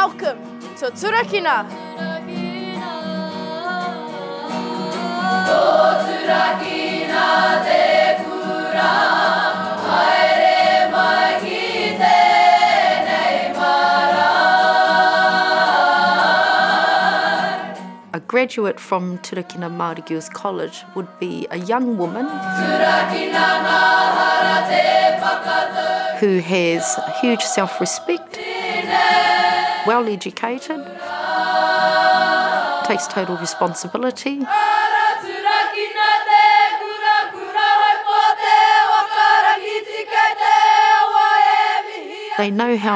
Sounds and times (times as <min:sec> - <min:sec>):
A capella: 0:01.6 - 0:17.8, 0:18.6 - 0:42.9.